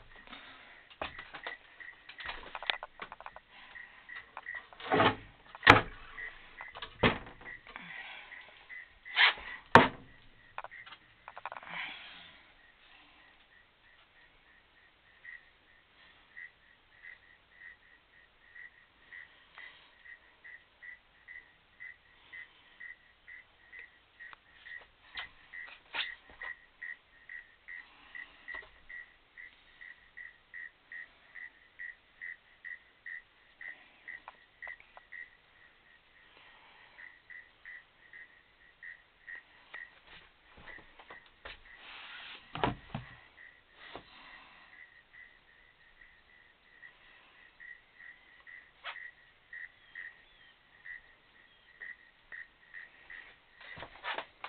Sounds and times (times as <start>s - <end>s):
Animal: 0.0s - 54.4s.